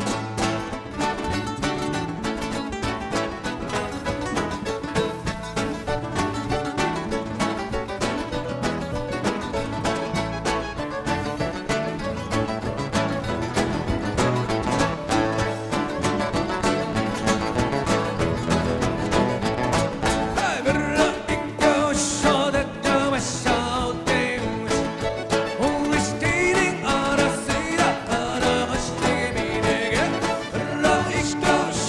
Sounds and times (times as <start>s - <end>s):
Acoustic guitar: 0.0s - 31.8s
Flamenco: 0.0s - 31.8s
Strum: 0.0s - 31.8s.